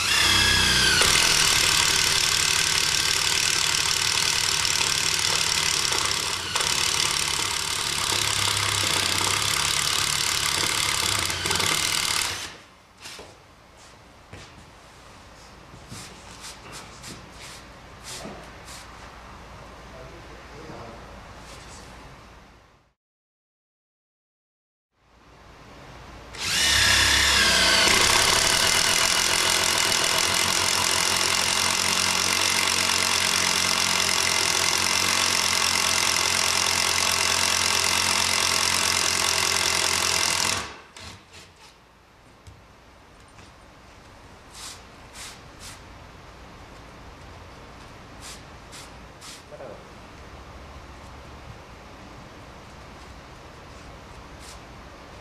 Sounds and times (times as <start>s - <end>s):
Speech: 19.9s - 21.2s, 49.5s - 50.0s.